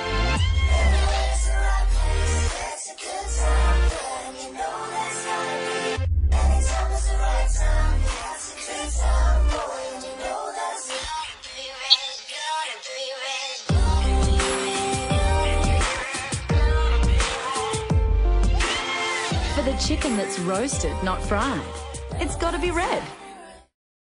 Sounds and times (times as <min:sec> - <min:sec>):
Music: 0:00.0 - 0:23.8
Speech: 0:19.5 - 0:23.2.